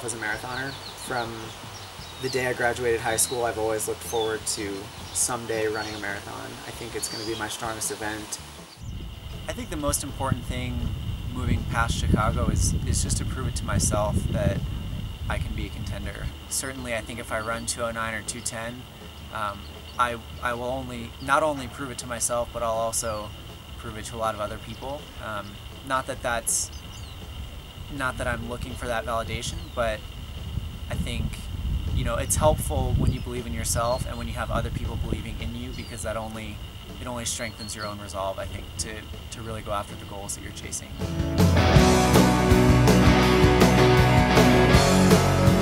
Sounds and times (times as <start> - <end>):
Speech: 0.0 - 1.6, 2.2 - 8.4, 9.5 - 14.6, 15.3 - 26.7, 27.9 - 30.0, 30.9 - 41.0
Outside, rural or natural: 0.0 - 45.6.